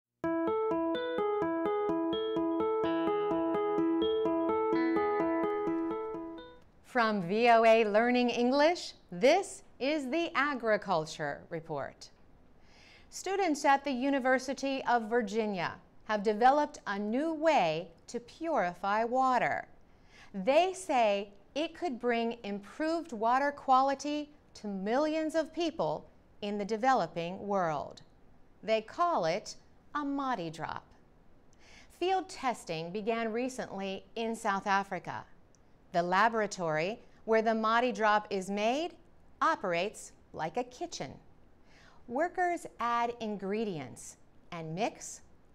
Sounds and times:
Keyboard (musical): 0:00.2 - 0:06.7.

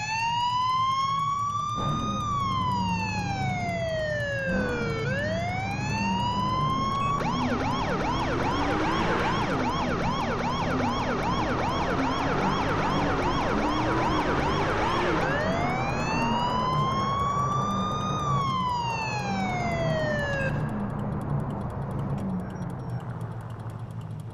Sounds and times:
Police car (siren): 0:00.0 - 0:23.8
Car: 0:00.0 - 0:24.3.

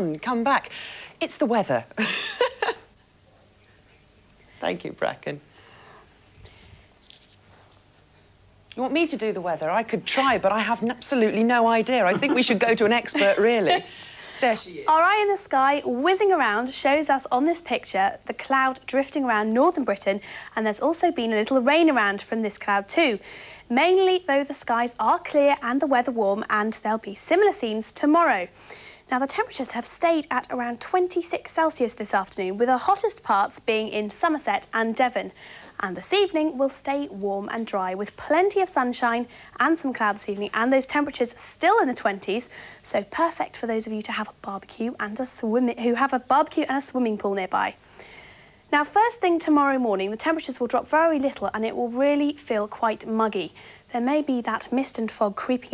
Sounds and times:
Speech: 0:08.7 - 0:28.5, 0:29.1 - 0:47.8, 0:48.7 - 0:55.7.

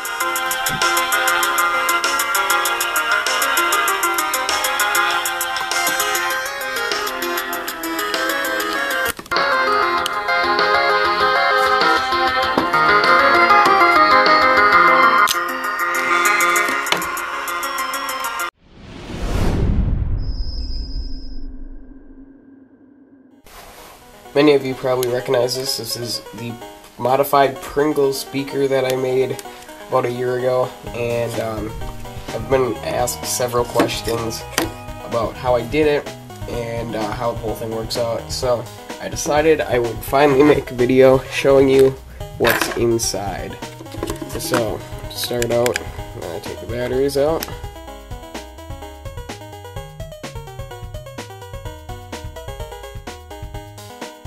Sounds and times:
Music: 0:00.0 - 0:18.6, 0:23.4 - 0:54.2.

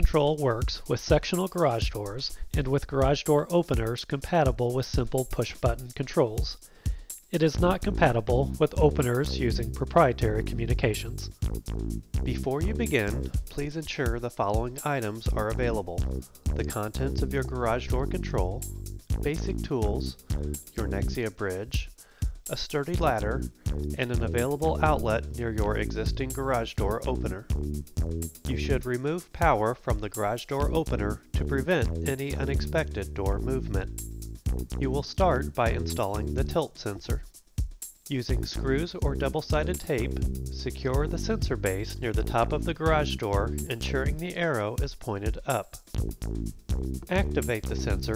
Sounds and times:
Speech: 0:00.0 - 0:06.6, 0:07.3 - 0:11.3, 0:12.3 - 0:16.0, 0:16.6 - 0:18.6, 0:19.2 - 0:20.2, 0:20.8 - 0:21.9, 0:22.5 - 0:23.4, 0:24.0 - 0:27.5, 0:28.5 - 0:33.9, 0:34.8 - 0:37.2, 0:38.1 - 0:45.8, 0:47.1 - 0:48.1
Music: 0:00.0 - 0:48.1.

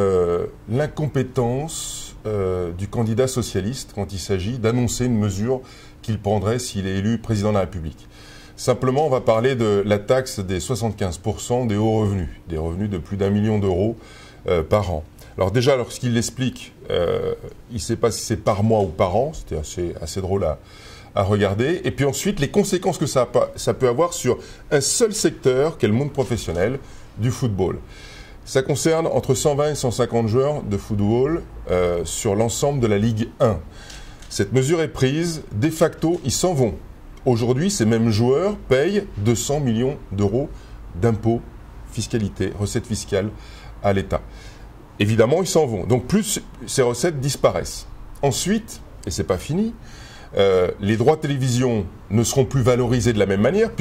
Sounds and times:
Speech: 0:00.0 - 0:27.9, 0:28.5 - 0:33.7, 0:34.3 - 0:44.3, 0:45.0 - 0:53.8.

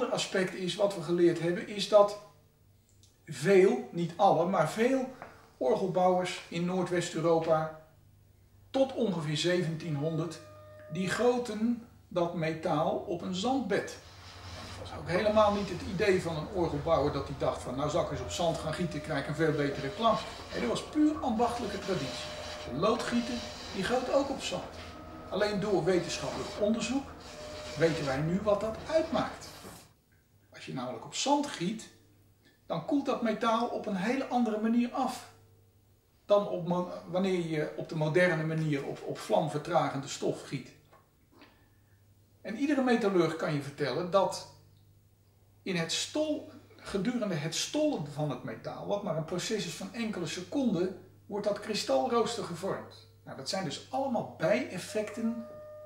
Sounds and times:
Speech: 0:00.0 - 0:02.2, 0:03.2 - 0:07.8, 0:08.7 - 0:14.0, 0:14.6 - 0:29.8, 0:30.5 - 0:32.0, 0:32.7 - 0:35.3, 0:36.3 - 0:40.8, 0:42.4 - 0:44.6, 0:45.6 - 0:55.5.

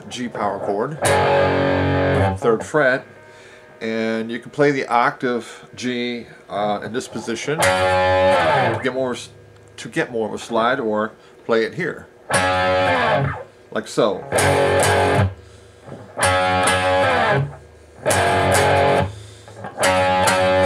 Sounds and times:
Speech: 0:00.0 - 0:01.0, 0:02.4 - 0:03.1, 0:03.8 - 0:07.6, 0:08.8 - 0:12.1, 0:13.7 - 0:14.3
Electric guitar: 0:01.0 - 0:03.8, 0:07.6 - 0:09.0, 0:12.3 - 0:13.6, 0:14.2 - 0:20.6
Strum: 0:01.0 - 0:03.8, 0:14.2 - 0:20.6.

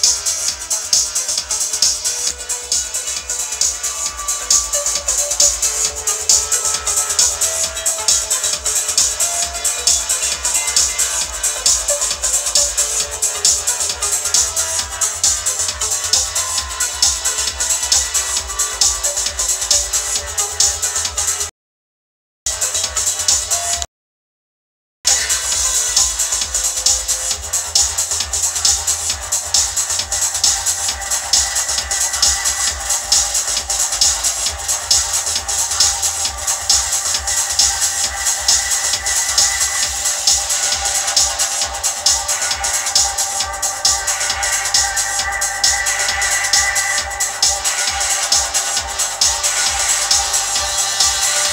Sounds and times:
Music: 0:00.0 - 0:21.5, 0:22.5 - 0:23.9, 0:25.1 - 0:51.5.

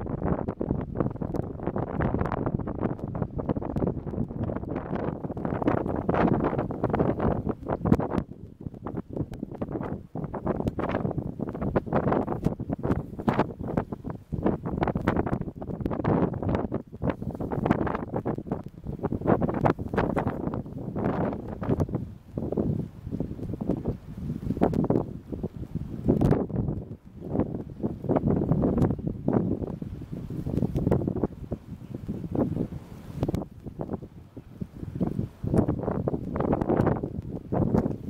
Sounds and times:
Outside, rural or natural: 0:00.0 - 0:38.0.

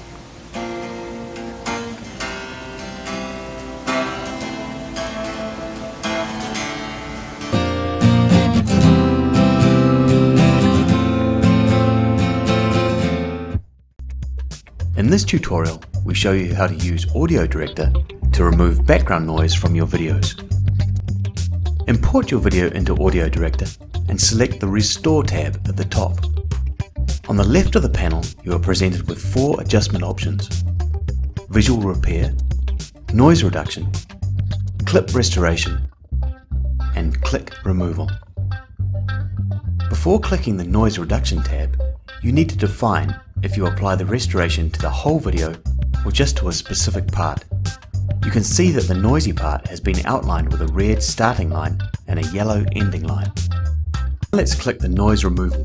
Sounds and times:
Music: 0:00.0 - 0:55.6
Speech: 0:15.0 - 0:20.4, 0:21.9 - 0:26.3, 0:27.3 - 0:30.6, 0:31.5 - 0:32.4, 0:33.1 - 0:34.0, 0:34.8 - 0:35.9, 0:37.0 - 0:38.2, 0:39.9 - 0:47.4, 0:48.2 - 0:53.3, 0:54.3 - 0:55.6.

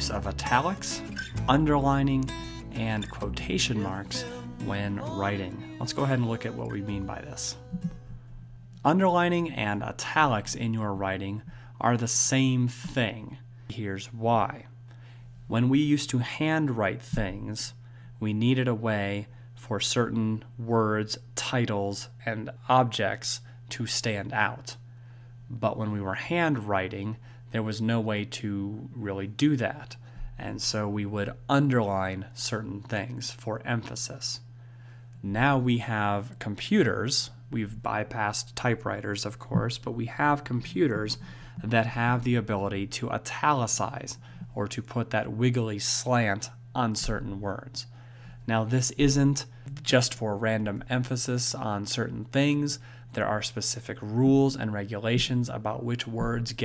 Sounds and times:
Speech: 0:00.0 - 0:07.6, 0:08.8 - 0:14.8, 0:15.5 - 0:24.8, 0:25.5 - 0:34.5, 0:35.2 - 0:47.9, 0:48.5 - 0:56.6.

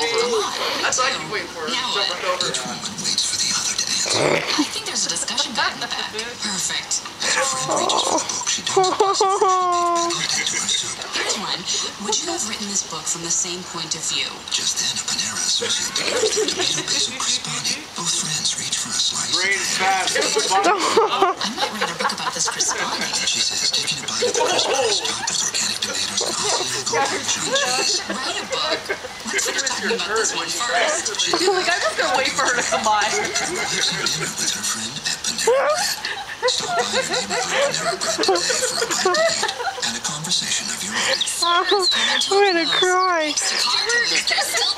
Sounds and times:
Speech: 0:00.0 - 0:44.7.

